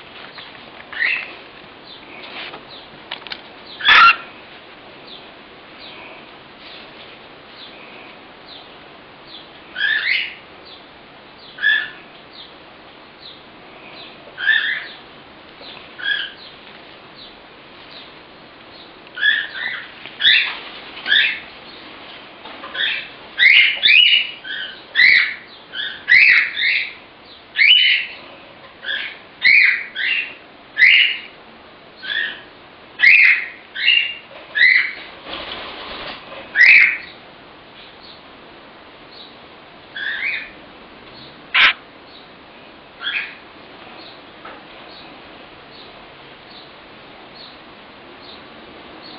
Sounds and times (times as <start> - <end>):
Inside, small room: 0.0 - 49.1
Bird: 0.3 - 4.4, 9.3 - 12.6, 13.2 - 21.9, 22.6 - 31.4, 32.0 - 37.2, 39.1 - 42.3, 43.0 - 46.8
Domestic animals, pets: 3.7 - 4.4, 11.6 - 12.1, 13.9 - 15.0, 16.0 - 16.5, 41.6 - 41.8, 43.0 - 43.4.